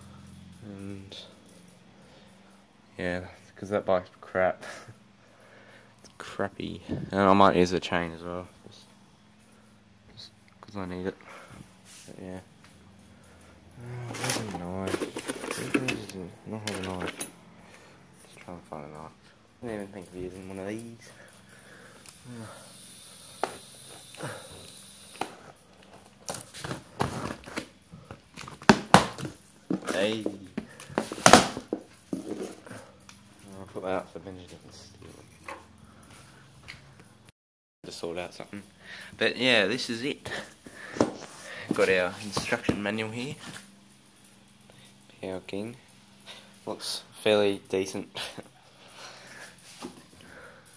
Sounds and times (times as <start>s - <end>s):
Speech: 3.0s - 4.9s, 6.2s - 8.8s, 10.1s - 11.2s, 18.4s - 21.1s, 29.9s - 30.5s, 33.4s - 35.0s, 37.9s - 40.5s, 41.7s - 43.5s, 45.2s - 45.8s, 46.7s - 48.4s.